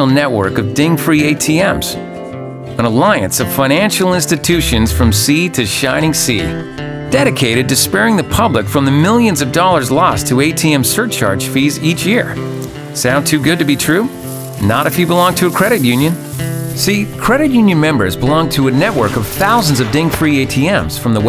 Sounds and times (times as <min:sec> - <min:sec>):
Speech: 0:00.0 - 0:02.0, 0:02.8 - 0:12.4, 0:13.0 - 0:16.2, 0:16.8 - 0:21.2
Music: 0:00.0 - 0:21.2.